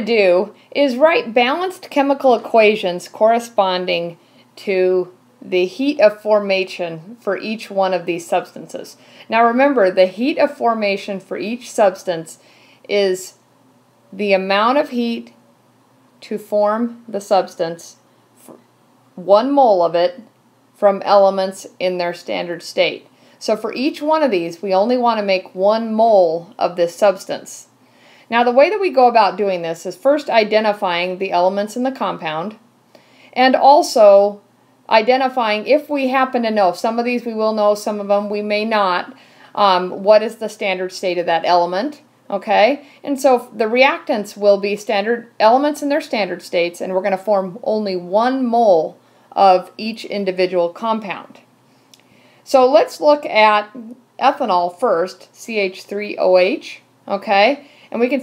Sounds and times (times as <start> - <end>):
Speech: 0.0 - 13.4, 14.2 - 15.4, 16.2 - 18.6, 19.2 - 27.7, 28.3 - 32.6, 33.4 - 51.4, 52.5 - 58.2.